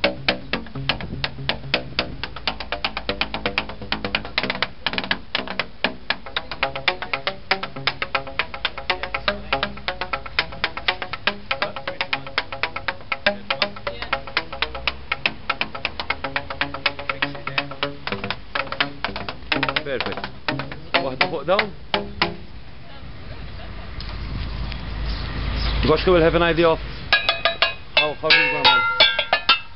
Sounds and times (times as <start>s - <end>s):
Percussion: 0.0s - 22.6s, 26.9s - 29.7s
Speech: 21.0s - 21.7s, 25.8s - 26.8s, 28.0s - 28.9s.